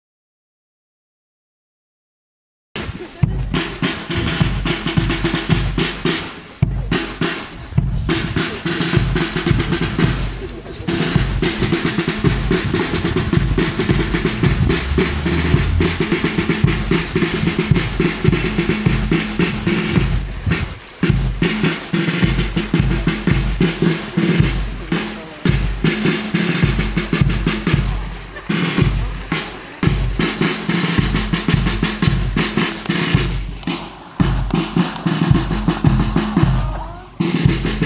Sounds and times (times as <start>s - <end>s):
Speech: 2.8s - 3.8s, 6.6s - 11.8s, 22.8s - 25.7s, 27.6s - 30.0s, 36.0s - 37.8s
Music: 2.8s - 37.8s
Stream: 2.8s - 37.8s.